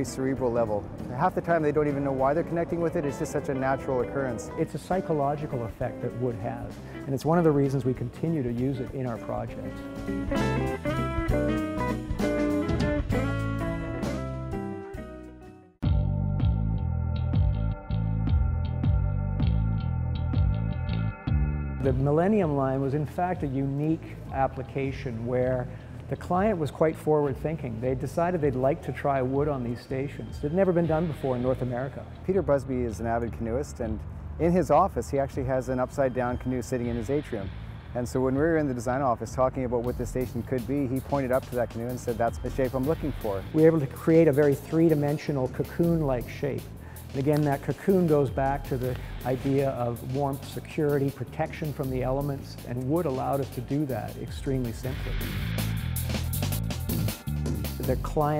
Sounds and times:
Music: 0.0s - 58.3s.

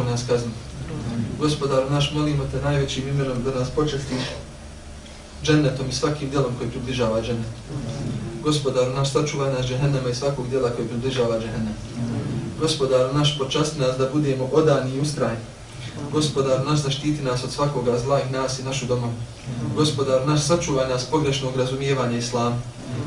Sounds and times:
Speech: 0.0s - 4.4s, 5.4s - 23.0s.

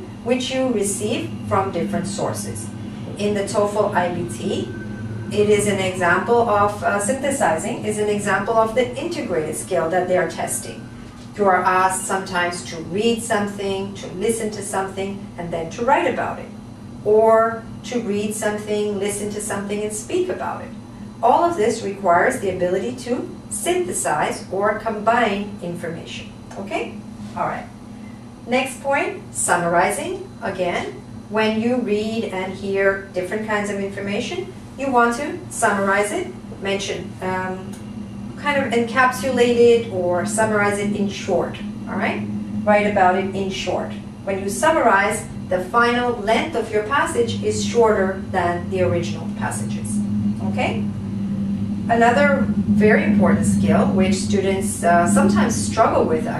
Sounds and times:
Speech: 0.3s - 4.7s, 5.4s - 10.8s, 11.4s - 27.7s, 28.5s - 37.8s, 38.4s - 50.8s, 51.9s - 56.3s.

